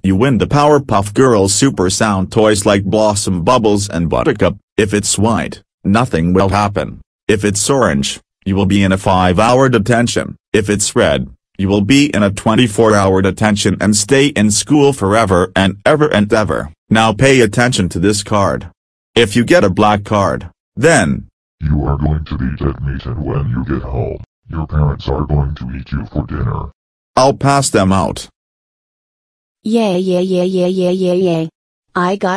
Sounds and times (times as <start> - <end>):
Speech: 0.0 - 28.4, 29.7 - 32.3.